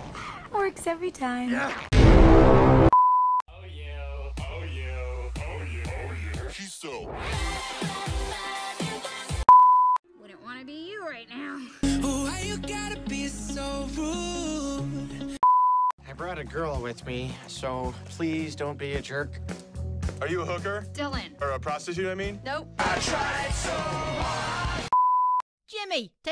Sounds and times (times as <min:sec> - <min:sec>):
Music: 0:03.5 - 0:09.5, 0:11.8 - 0:15.4, 0:16.0 - 0:24.9.